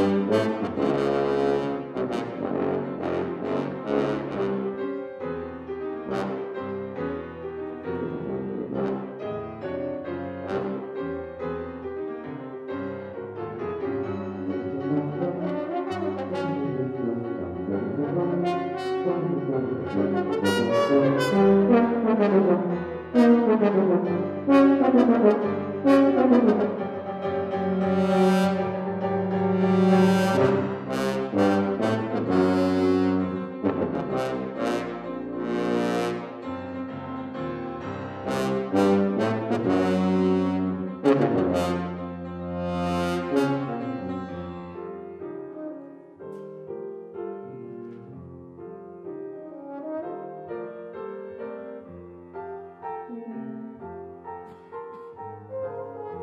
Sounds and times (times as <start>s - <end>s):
Trombone: 0.0s - 11.6s, 14.0s - 44.8s, 49.3s - 50.8s, 54.4s - 56.2s.